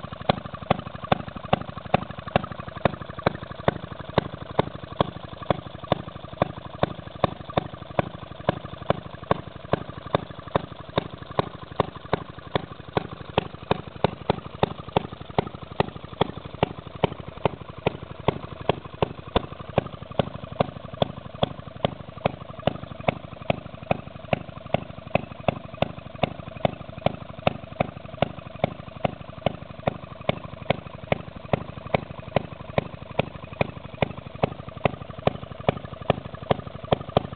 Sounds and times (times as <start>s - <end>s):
Engine: 0.0s - 37.3s.